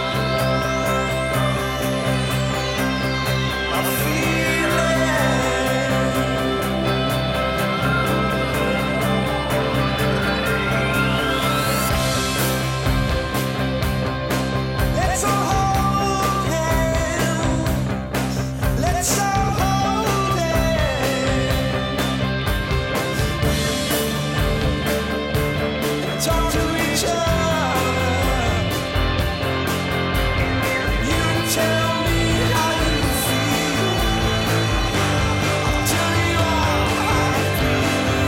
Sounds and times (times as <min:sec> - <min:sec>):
Music: 0:00.0 - 0:38.2
Male singing: 0:03.7 - 0:07.2, 0:15.0 - 0:17.9, 0:18.7 - 0:21.8, 0:26.0 - 0:28.8, 0:31.0 - 0:38.2.